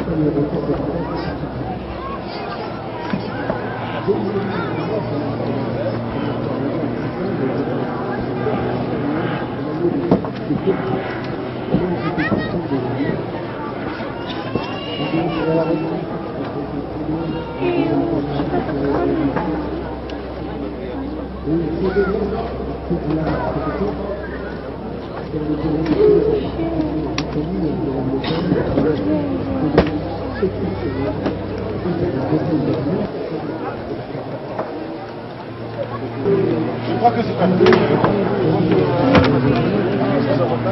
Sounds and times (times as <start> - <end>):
Speech: 0.0 - 40.7.